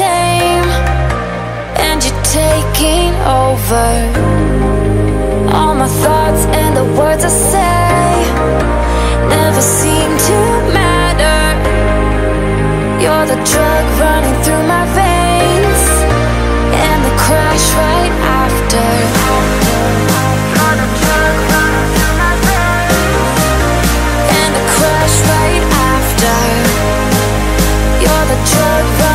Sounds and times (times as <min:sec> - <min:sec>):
Music: 0:00.0 - 0:29.1.